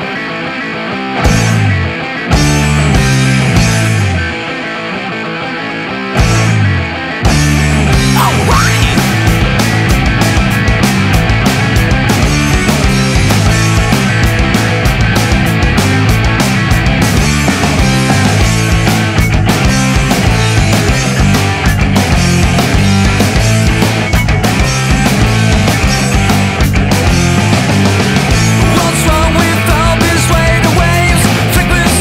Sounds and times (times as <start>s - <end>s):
Heavy metal: 0.0s - 32.0s
Progressive rock: 0.0s - 32.0s
Rock and roll: 0.0s - 32.0s.